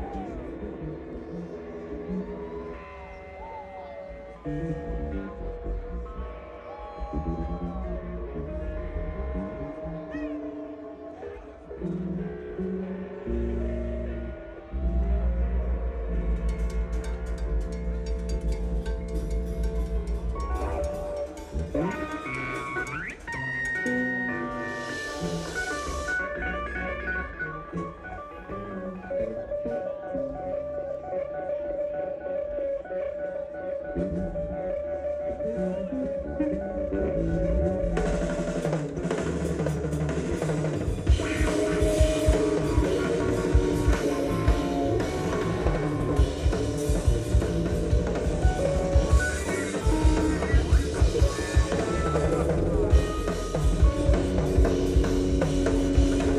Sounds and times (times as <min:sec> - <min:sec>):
Music: 0:00.0 - 0:56.3.